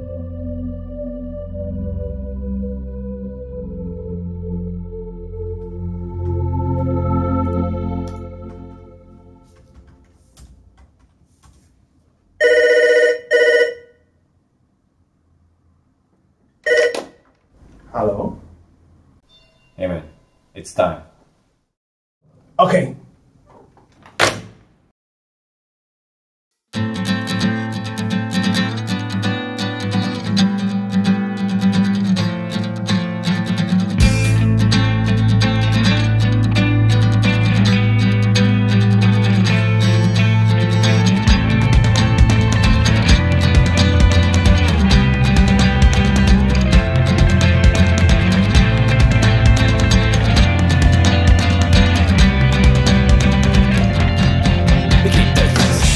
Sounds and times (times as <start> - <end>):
Music: 0.0 - 9.9, 26.8 - 55.9
Speech: 17.9 - 18.5, 19.8 - 21.1, 22.6 - 23.1.